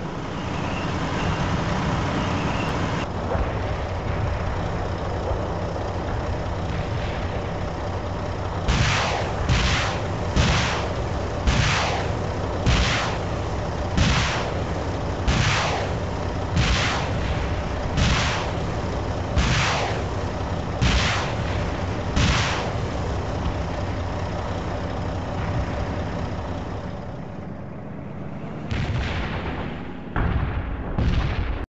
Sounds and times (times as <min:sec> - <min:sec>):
Artillery fire: 0:06.1 - 0:23.1, 0:28.6 - 0:31.7.